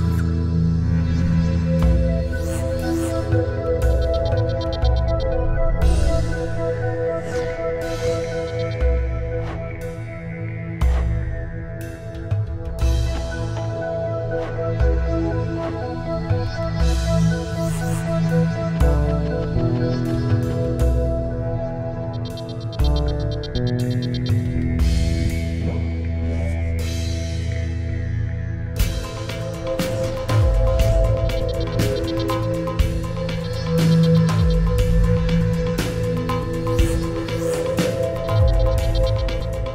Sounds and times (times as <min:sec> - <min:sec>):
Music: 0:00.0 - 0:39.7.